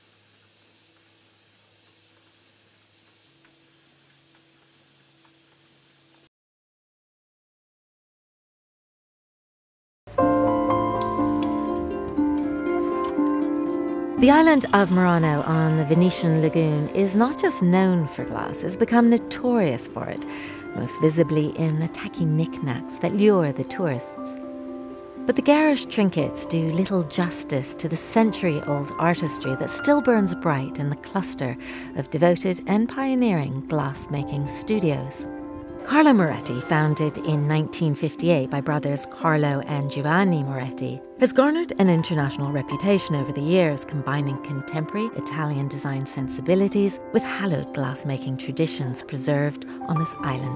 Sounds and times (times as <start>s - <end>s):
Music: 10.1s - 50.5s
Speech: 14.2s - 20.2s, 20.8s - 24.4s, 25.3s - 35.3s, 35.9s - 50.5s.